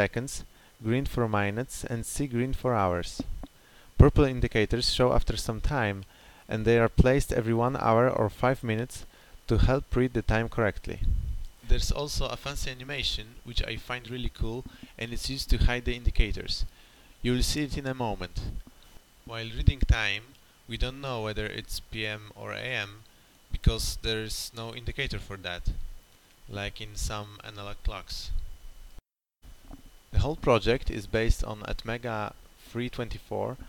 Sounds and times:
Speech: 0:00.0 - 0:03.3, 0:04.0 - 0:18.6, 0:19.3 - 0:25.8, 0:26.5 - 0:28.4, 0:30.1 - 0:33.6.

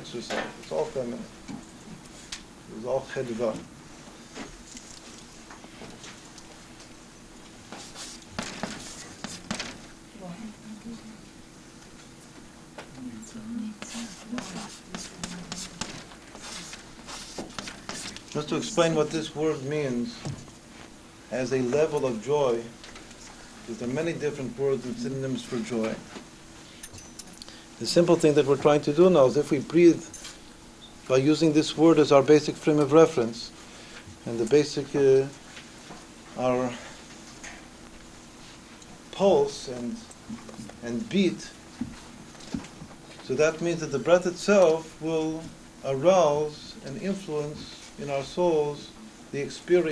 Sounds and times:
Speech: 0:00.0 - 0:01.3, 0:02.7 - 0:03.7, 0:18.4 - 0:20.3, 0:21.3 - 0:22.7, 0:23.7 - 0:26.1, 0:27.8 - 0:30.1, 0:31.1 - 0:33.5, 0:34.3 - 0:35.4, 0:36.4 - 0:36.8, 0:39.1 - 0:40.1, 0:40.8 - 0:41.6, 0:43.3 - 0:49.9.

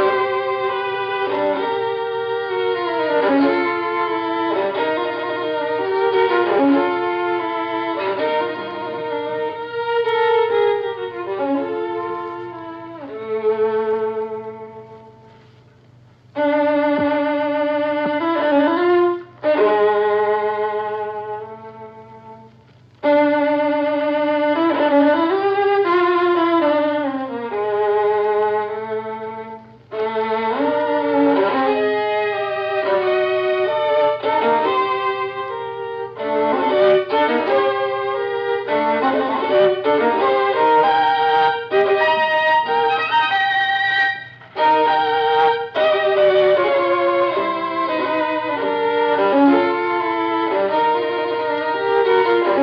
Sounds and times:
Violin, fiddle: 0:00.0 - 0:52.6.

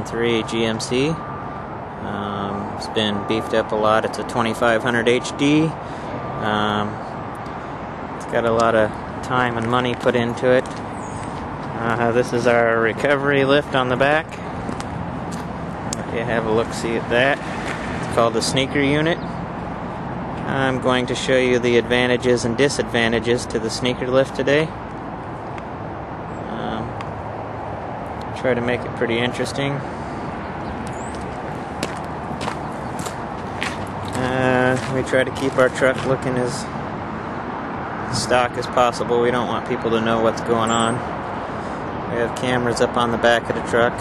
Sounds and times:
Speech: 0:00.0 - 0:01.2, 0:02.0 - 0:05.8, 0:06.4 - 0:07.0, 0:08.2 - 0:10.7, 0:11.7 - 0:14.4, 0:16.0 - 0:17.4, 0:18.1 - 0:19.2, 0:20.4 - 0:24.8, 0:26.5 - 0:27.0, 0:28.3 - 0:29.9, 0:34.1 - 0:36.8, 0:38.1 - 0:41.1, 0:42.1 - 0:44.0.

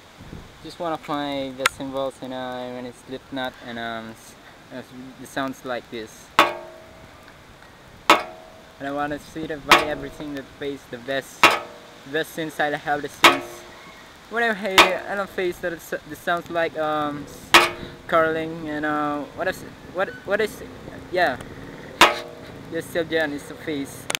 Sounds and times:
Speech: 0:00.6 - 0:06.4, 0:08.8 - 0:11.4, 0:12.1 - 0:13.7, 0:14.3 - 0:21.4, 0:22.7 - 0:24.1
Ping: 0:06.4 - 0:07.2, 0:08.1 - 0:08.8, 0:09.7 - 0:10.2, 0:11.4 - 0:12.0, 0:13.3 - 0:13.8, 0:14.8 - 0:15.2, 0:17.6 - 0:18.2, 0:22.0 - 0:22.5.

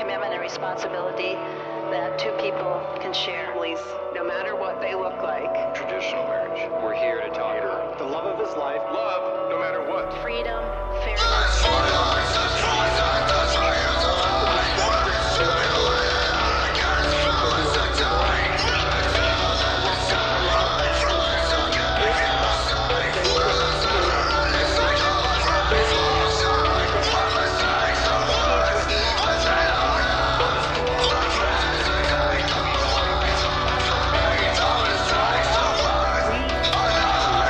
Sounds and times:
Music: 0:00.0 - 0:37.4.

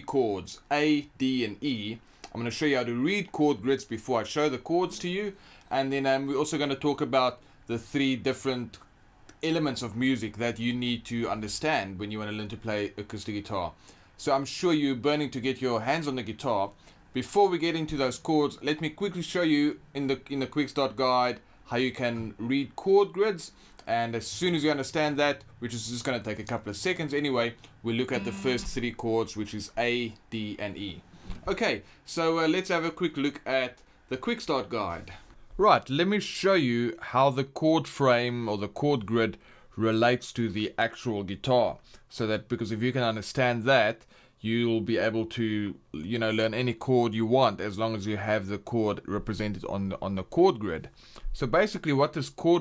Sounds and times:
Speech: 0:00.0 - 0:52.6.

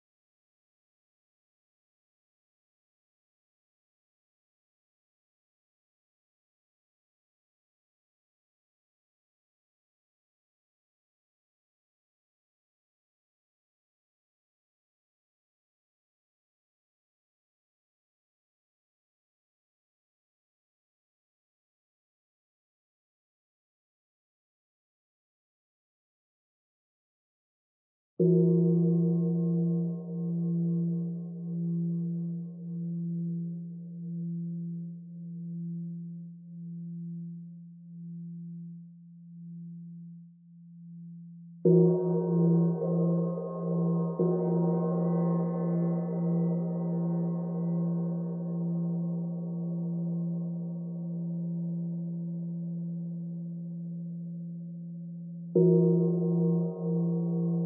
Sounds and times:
Gong: 0:28.2 - 0:38.7, 0:40.8 - 0:57.6
Chirp tone: 0:28.3 - 0:57.6.

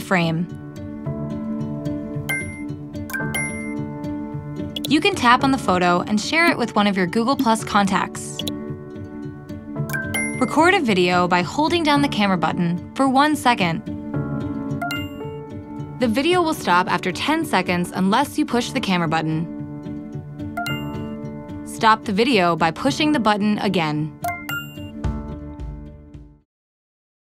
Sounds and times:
Speech: 0:00.0 - 0:00.5, 0:04.9 - 0:08.4, 0:10.4 - 0:13.8, 0:16.0 - 0:19.5, 0:21.7 - 0:24.2
Music: 0:00.0 - 0:26.5.

